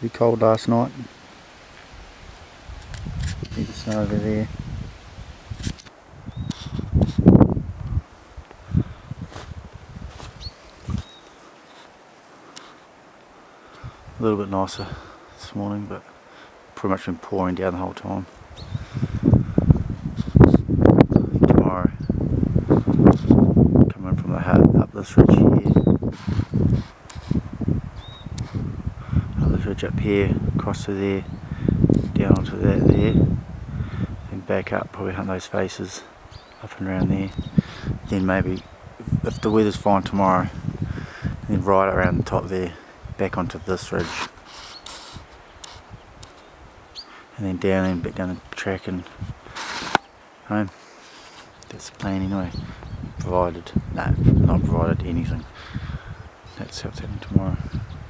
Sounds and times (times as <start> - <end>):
Speech: 0.0 - 1.1, 3.5 - 4.5, 14.2 - 16.0, 16.8 - 18.3, 21.5 - 22.0, 23.9 - 25.8, 29.4 - 31.3, 32.2 - 33.2, 34.3 - 37.4, 38.1 - 40.6, 41.4 - 44.3, 47.4 - 49.1, 50.5 - 50.8, 51.7 - 52.6, 53.2 - 55.5, 56.6 - 57.7.